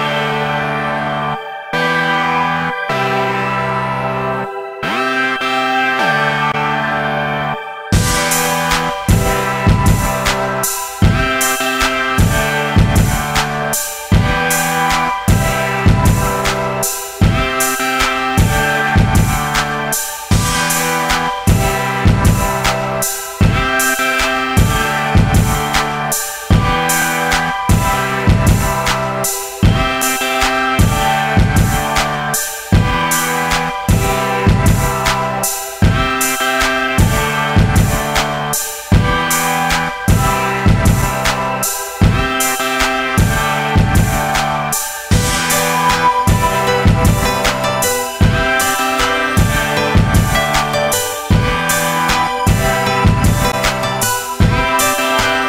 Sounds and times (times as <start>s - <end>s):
Pop music: 0.0s - 55.4s.